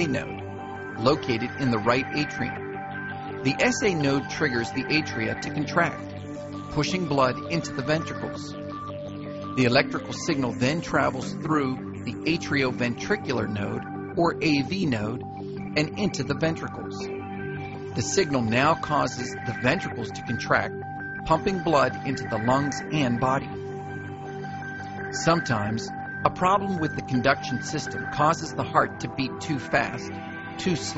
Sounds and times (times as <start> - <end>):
Speech: 0.0 - 0.4, 1.0 - 2.6, 3.5 - 6.0, 6.7 - 8.6, 9.6 - 15.2, 15.8 - 17.0, 18.0 - 20.7, 21.3 - 23.5, 25.2 - 30.9
Music: 0.0 - 30.9.